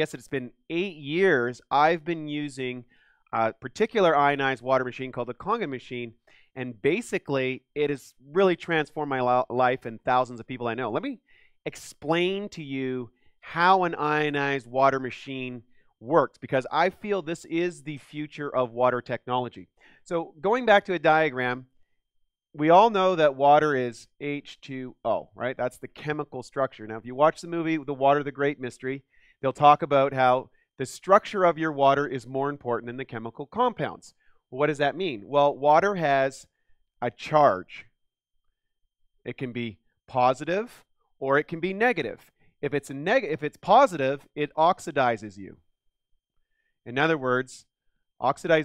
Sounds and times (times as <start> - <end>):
Speech: 0.0 - 21.7, 22.6 - 38.0, 39.3 - 45.6, 46.9 - 48.6.